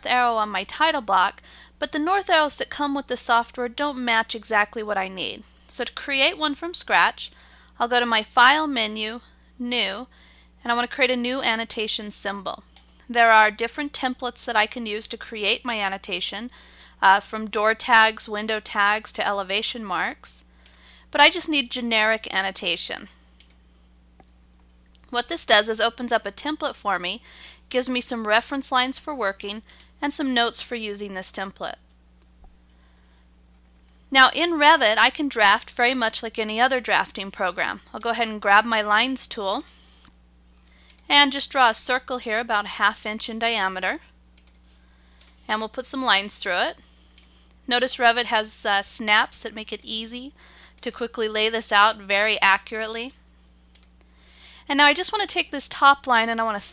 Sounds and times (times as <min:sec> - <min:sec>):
Speech: 0:00.0 - 0:20.4, 0:21.2 - 0:23.1, 0:25.1 - 0:31.8, 0:34.1 - 0:39.7, 0:41.1 - 0:44.0, 0:45.5 - 0:46.8, 0:47.7 - 0:53.2, 0:54.7 - 0:56.7.